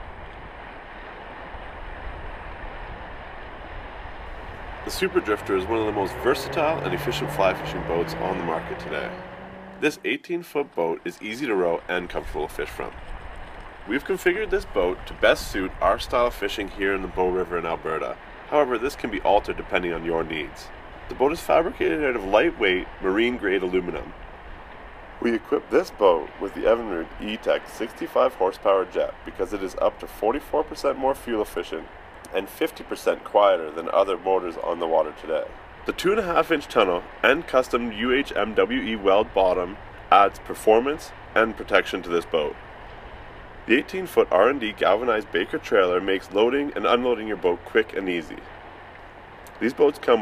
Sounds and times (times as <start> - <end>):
Motorboat, speedboat: 0.0 - 10.0, 11.4 - 50.2
Speech: 4.9 - 9.2, 9.8 - 13.0, 13.9 - 24.1, 25.2 - 42.6, 43.7 - 48.4, 49.5 - 50.2.